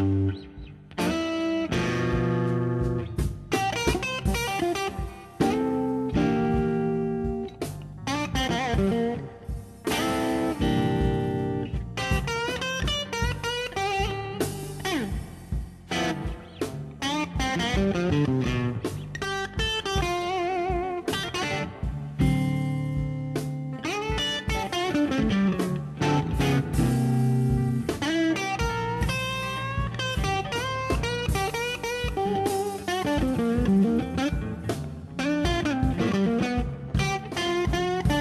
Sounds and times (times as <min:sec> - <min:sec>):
Music: 0:00.0 - 0:38.2.